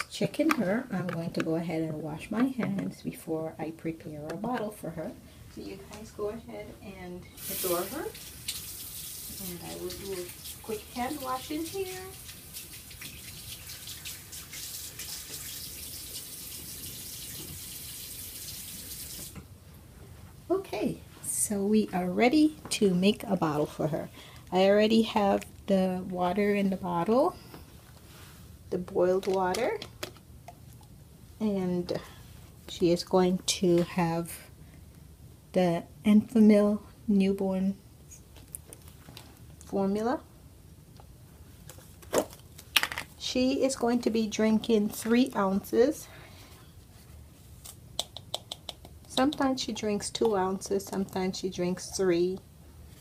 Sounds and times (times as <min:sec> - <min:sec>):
Speech: 0:00.0 - 0:08.2, 0:09.4 - 0:12.2, 0:20.5 - 0:27.4, 0:28.7 - 0:29.8, 0:32.7 - 0:34.5, 0:39.7 - 0:40.3, 0:43.2 - 0:46.1, 0:49.1 - 0:52.4
Inside, small room: 0:00.0 - 0:53.0.